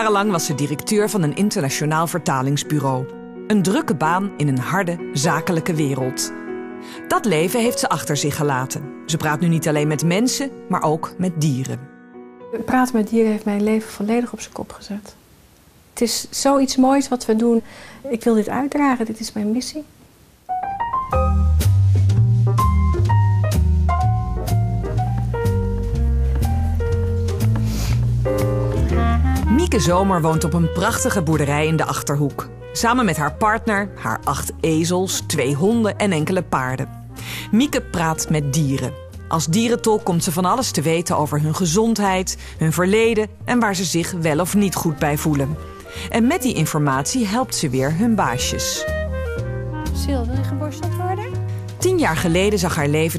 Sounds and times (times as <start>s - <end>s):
Music: 0.0s - 14.8s, 20.5s - 53.1s
Speech: 29.5s - 36.9s, 46.2s - 48.8s, 50.0s - 53.1s.